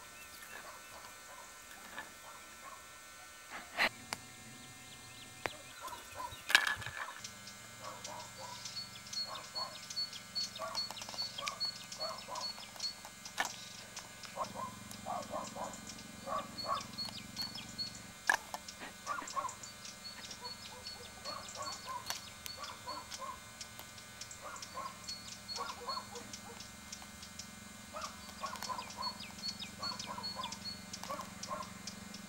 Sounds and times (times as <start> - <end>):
Domestic animals, pets: 0.4 - 2.9, 5.4 - 23.6, 24.3 - 32.2.